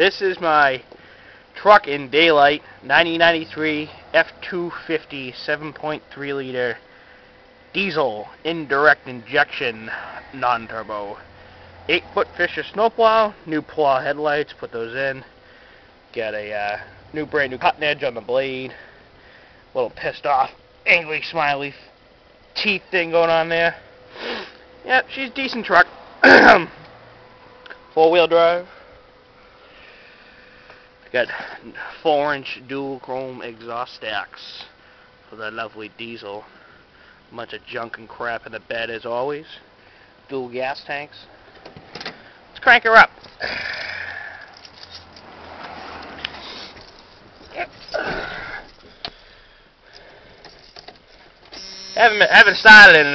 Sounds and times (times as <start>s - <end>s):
Speech: 0.0s - 0.8s, 1.6s - 6.8s, 7.8s - 11.2s, 11.9s - 15.3s, 16.2s - 18.8s, 19.8s - 21.9s, 22.6s - 23.8s, 24.8s - 26.7s, 28.0s - 28.7s, 31.1s - 34.7s, 35.3s - 36.5s, 37.3s - 39.7s, 40.3s - 41.3s, 42.6s - 43.1s, 52.0s - 53.1s.